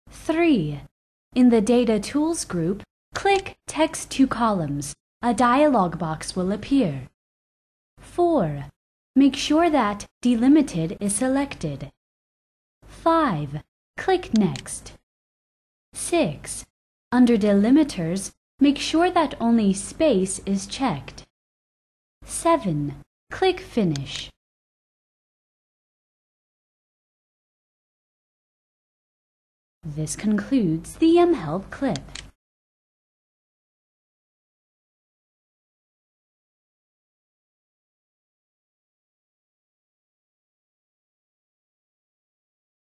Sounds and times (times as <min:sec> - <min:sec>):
Speech: 0:00.2 - 0:07.2, 0:08.1 - 0:12.0, 0:13.0 - 0:15.0, 0:16.0 - 0:21.3, 0:22.3 - 0:24.4, 0:29.9 - 0:32.2.